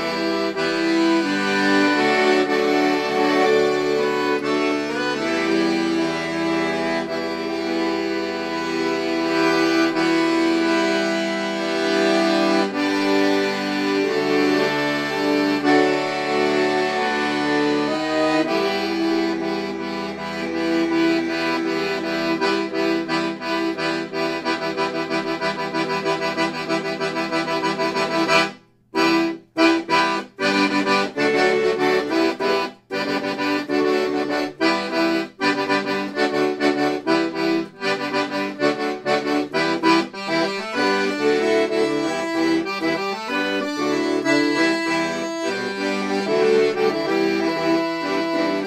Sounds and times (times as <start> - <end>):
Accordion: 0.0 - 48.6.